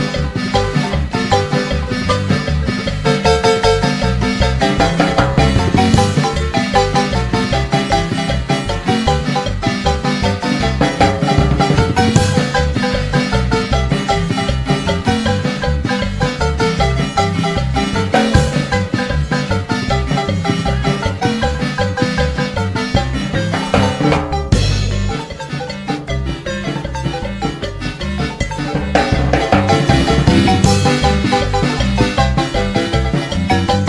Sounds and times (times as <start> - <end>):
Music of Latin America: 0.0 - 33.8.